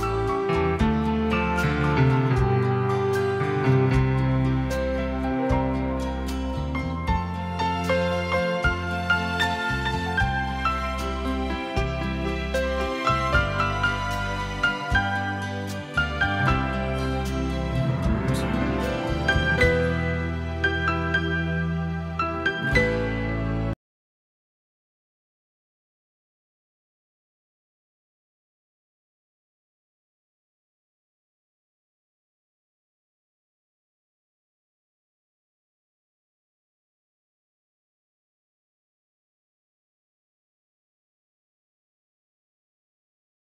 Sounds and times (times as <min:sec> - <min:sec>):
Tender music: 0:00.0 - 0:23.8.